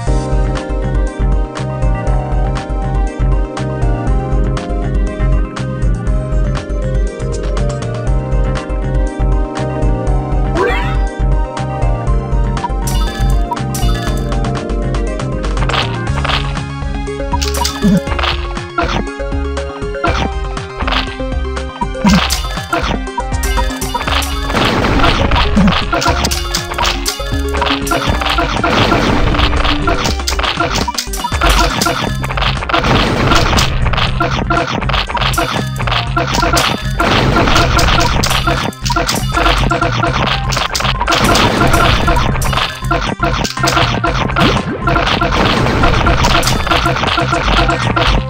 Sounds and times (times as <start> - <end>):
Music: 0.0 - 48.2.